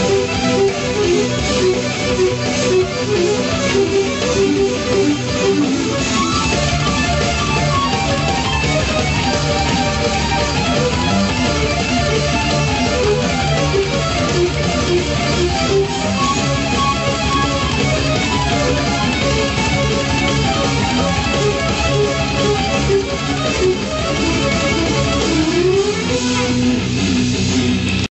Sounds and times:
Accordion: 0:00.0 - 0:26.8.

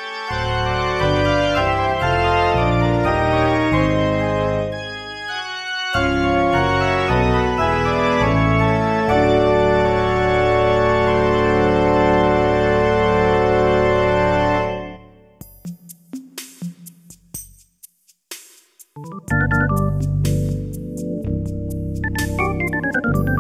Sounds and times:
Music: 0:00.0 - 0:23.4.

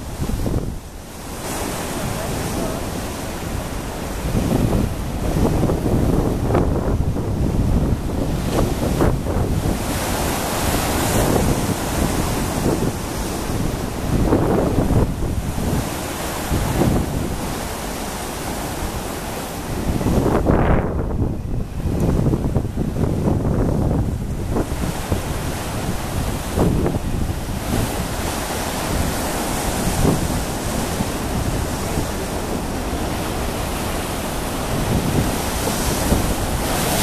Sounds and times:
Boat, Water vehicle: 0:00.0 - 0:37.0
Ocean: 0:00.0 - 0:37.0.

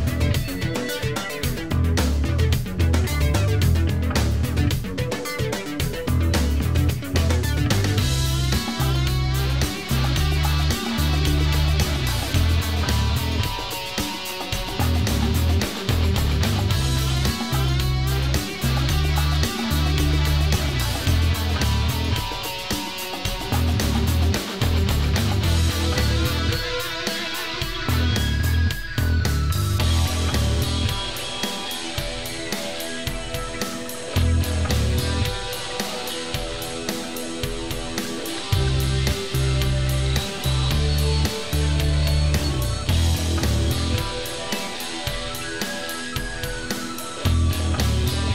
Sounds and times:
Music: 0:00.0 - 0:48.3.

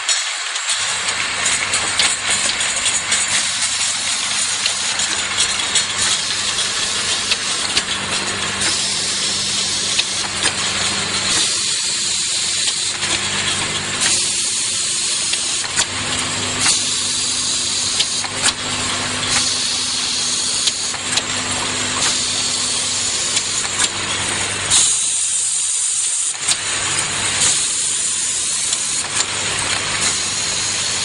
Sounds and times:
Fill (with liquid): 0:00.0 - 0:31.0.

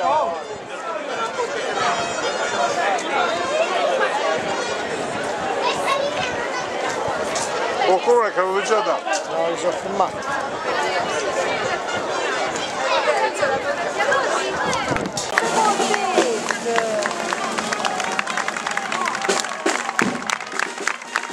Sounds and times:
Speech: 0:00.0 - 0:17.6
Crowd: 0:00.0 - 0:21.3.

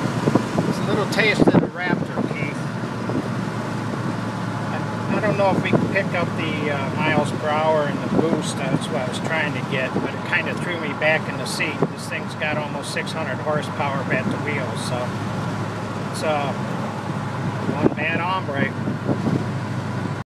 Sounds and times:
Speech: 0:00.7 - 0:02.6, 0:04.7 - 0:15.2, 0:16.1 - 0:16.6, 0:17.7 - 0:18.8.

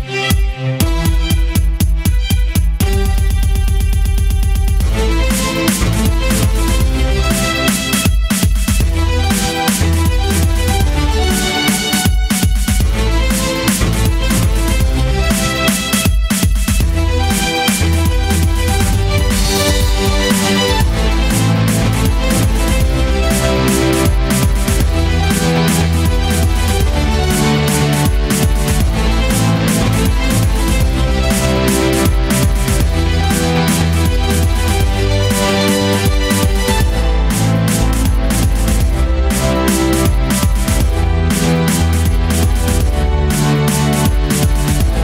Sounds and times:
Violin, fiddle: 0:00.0 - 0:16.1, 0:16.8 - 0:45.0.

